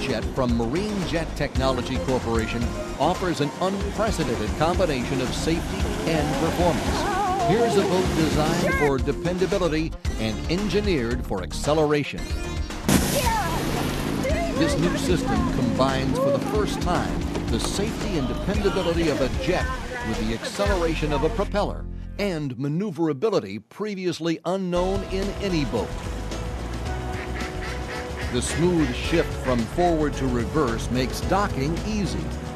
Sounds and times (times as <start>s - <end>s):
Speech: 0.0s - 12.2s, 14.4s - 25.9s, 28.4s - 32.3s
Music: 0.0s - 23.6s, 24.7s - 32.5s.